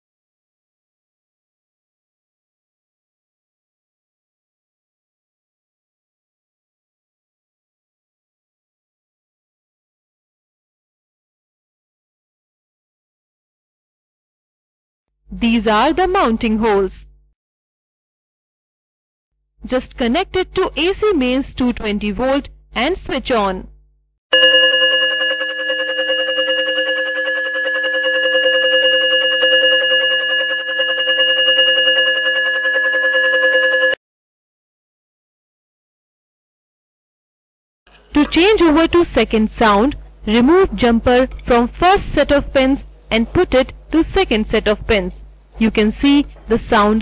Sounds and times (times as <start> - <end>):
Speech: 15.4 - 17.1, 19.7 - 23.7, 38.1 - 47.0.